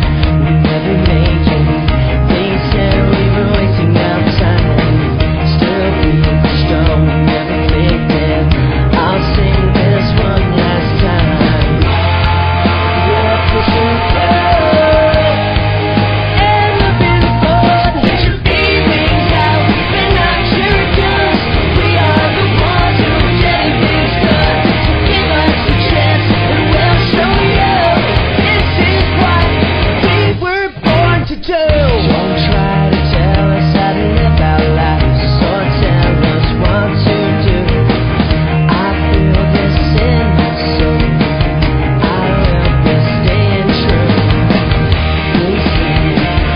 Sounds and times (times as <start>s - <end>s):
Pop music: 0.0s - 46.5s.